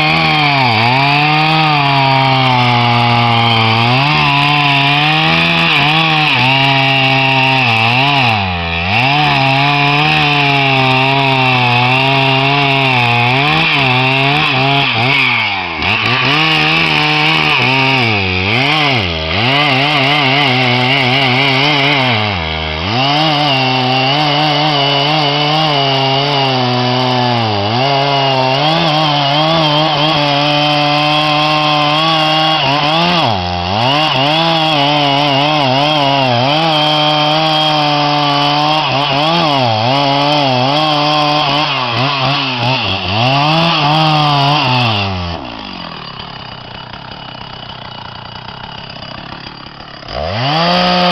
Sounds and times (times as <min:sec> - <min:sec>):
Chainsaw: 0:00.0 - 0:51.1.